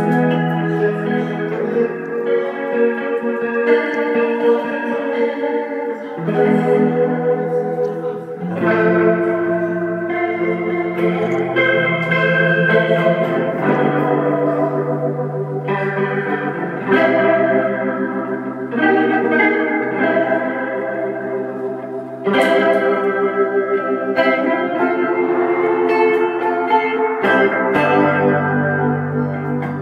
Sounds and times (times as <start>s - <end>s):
Strum: 0.0s - 29.8s.